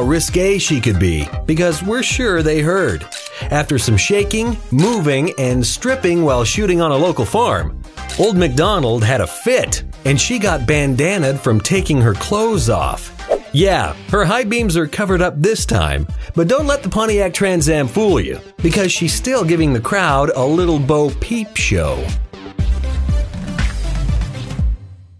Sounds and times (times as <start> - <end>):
Speech: 0.0 - 22.2
Music: 0.0 - 25.1.